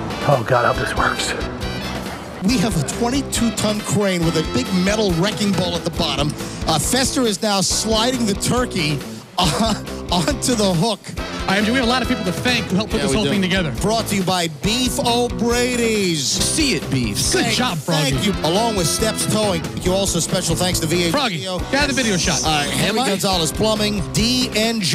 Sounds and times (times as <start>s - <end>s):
Music: 0.0s - 24.9s
Speech: 0.2s - 1.5s, 2.4s - 24.9s.